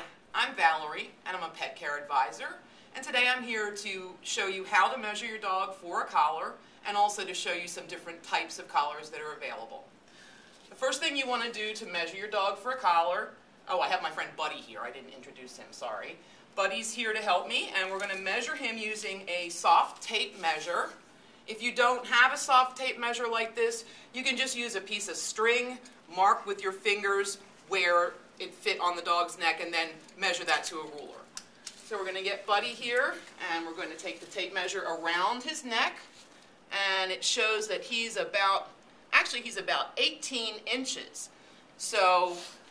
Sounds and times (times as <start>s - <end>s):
Speech: 0.0s - 9.9s, 10.7s - 31.3s, 31.9s - 36.1s, 36.7s - 42.6s.